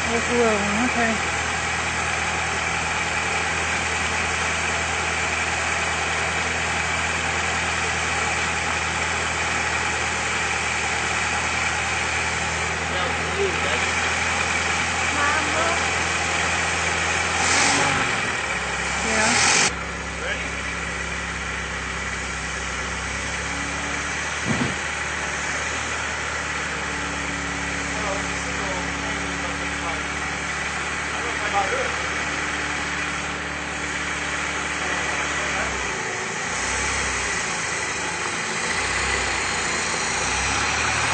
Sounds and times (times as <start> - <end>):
Speech: 0.0 - 1.2, 12.8 - 14.0, 15.1 - 15.8, 19.0 - 19.4, 20.2 - 20.6, 28.0 - 30.1, 31.1 - 32.0, 34.8 - 35.8
Car: 0.0 - 41.1.